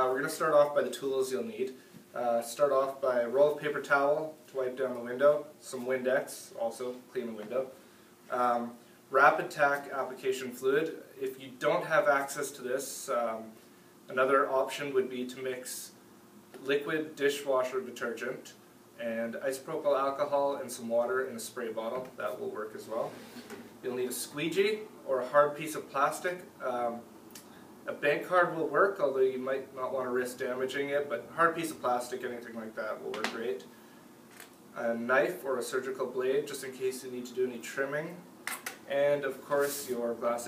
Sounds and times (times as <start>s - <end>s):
Speech: 0.0s - 16.0s, 16.6s - 23.2s, 23.8s - 27.1s, 27.9s - 33.7s, 34.8s - 38.3s, 38.9s - 40.4s.